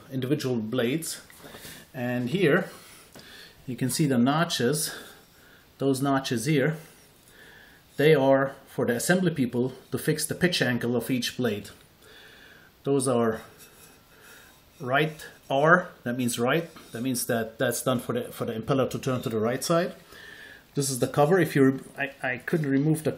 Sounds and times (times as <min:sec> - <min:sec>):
Speech: 0:00.0 - 0:01.3, 0:01.9 - 0:02.8, 0:03.7 - 0:05.1, 0:05.8 - 0:06.9, 0:08.0 - 0:11.8, 0:12.8 - 0:13.6, 0:14.8 - 0:20.0, 0:20.8 - 0:23.1.